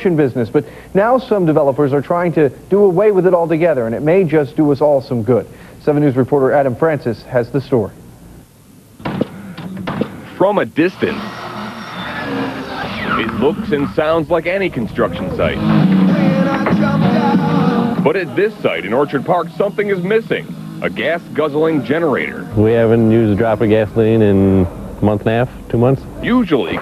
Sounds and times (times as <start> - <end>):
Speech: 0.0 - 8.0, 10.4 - 11.2, 13.1 - 15.6, 18.1 - 26.8
Music: 14.9 - 22.6.